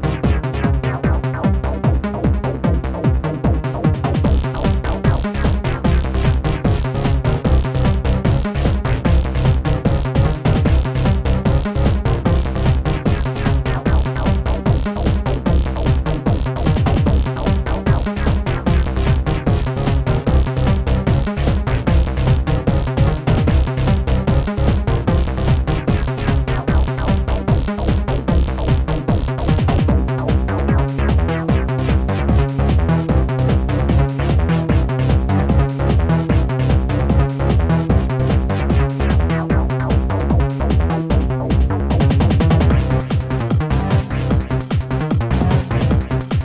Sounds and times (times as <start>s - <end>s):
Theme music: 3.3s - 46.4s.